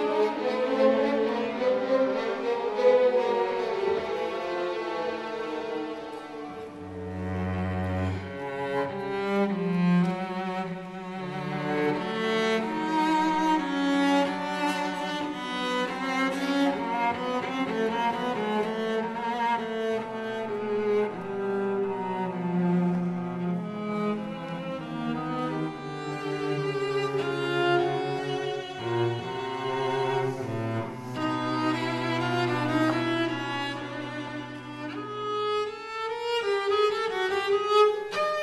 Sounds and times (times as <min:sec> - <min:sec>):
Cello: 0:00.0 - 0:38.4.